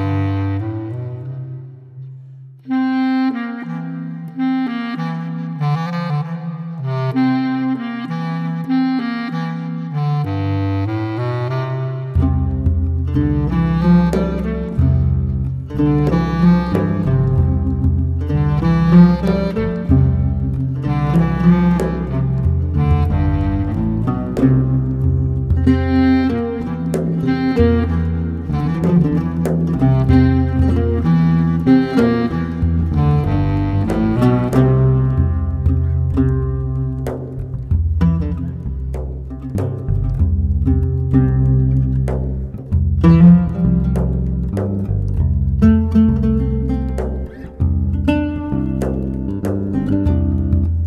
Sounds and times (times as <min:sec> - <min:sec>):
Music: 0:00.0 - 0:50.8.